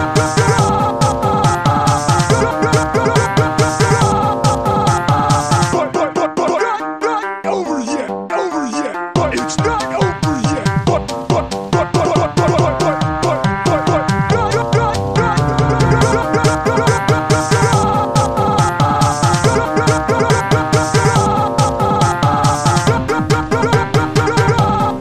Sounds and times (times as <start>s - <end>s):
Techno: 0.0s - 6.2s, 9.2s - 25.0s.